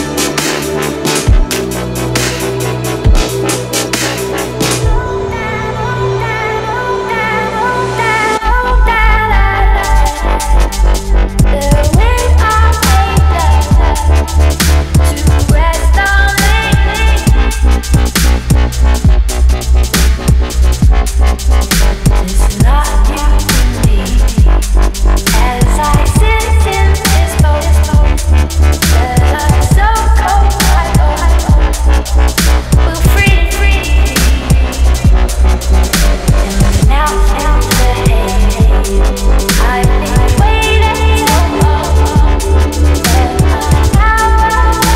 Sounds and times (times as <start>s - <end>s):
Drum and bass: 0.0s - 44.9s.